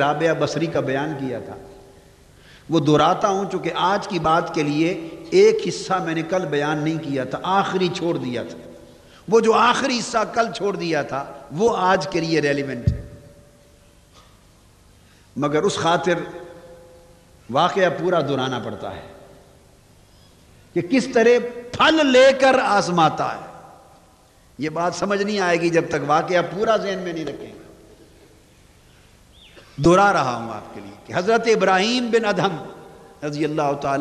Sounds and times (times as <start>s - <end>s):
Male speech, man speaking: 0.0s - 1.7s, 2.7s - 8.6s, 9.3s - 13.0s, 15.4s - 16.3s, 17.5s - 19.2s, 20.8s - 23.5s, 24.6s - 27.6s, 29.8s - 34.0s
Narration, monologue: 0.0s - 34.0s.